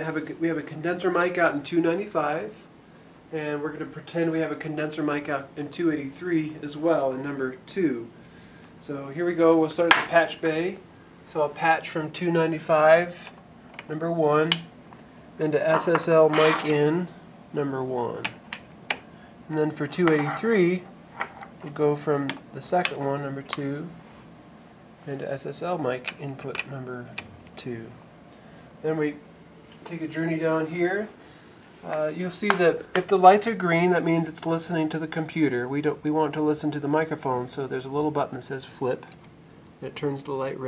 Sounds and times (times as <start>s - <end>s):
Speech: 0.0s - 2.7s, 3.3s - 8.2s, 8.8s - 14.7s, 15.4s - 18.4s, 19.5s - 20.9s, 21.6s - 24.0s, 25.0s - 28.0s, 28.8s - 29.2s, 29.8s - 31.2s, 31.8s - 39.2s, 39.8s - 40.6s.